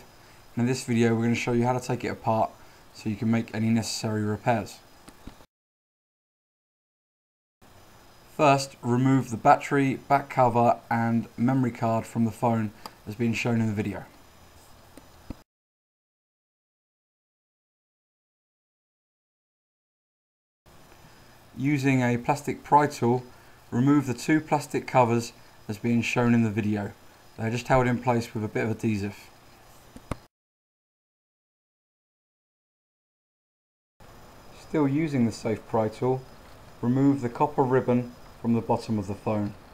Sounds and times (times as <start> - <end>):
Speech: 0.0 - 4.9, 8.4 - 14.2, 21.6 - 29.3, 34.6 - 39.6.